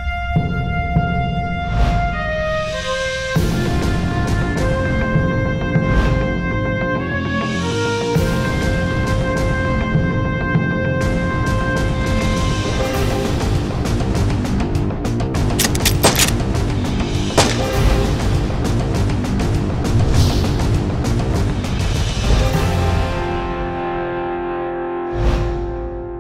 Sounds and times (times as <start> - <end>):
Music: 0.0 - 26.2.